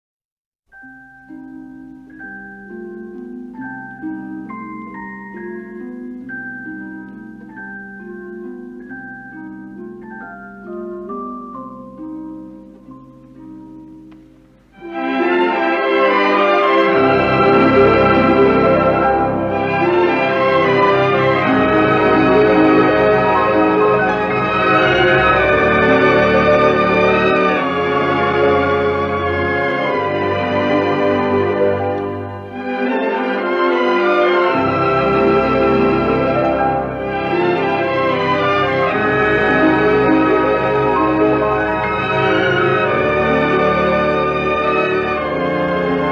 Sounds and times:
Music: 0.7s - 46.1s.

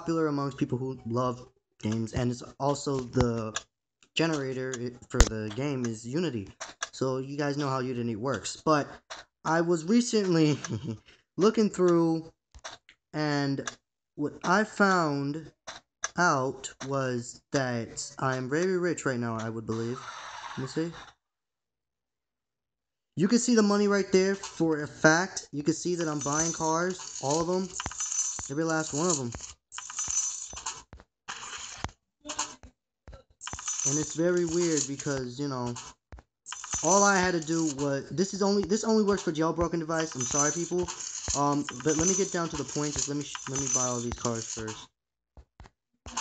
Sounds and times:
Speech: 0.0s - 3.6s, 4.2s - 8.9s, 9.5s - 12.3s, 13.2s - 15.5s, 16.2s - 20.0s, 20.6s - 21.0s, 23.2s - 27.8s, 28.5s - 29.3s, 33.9s - 35.8s, 36.8s - 44.8s.

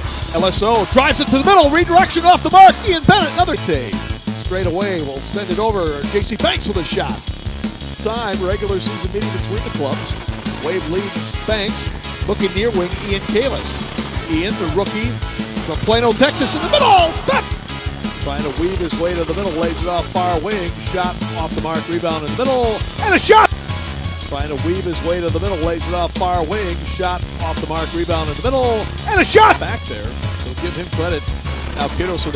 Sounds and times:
Music: 0.0s - 32.3s
Speech: 0.3s - 7.2s, 8.0s - 17.4s, 18.2s - 23.5s, 24.3s - 31.2s, 31.8s - 32.3s.

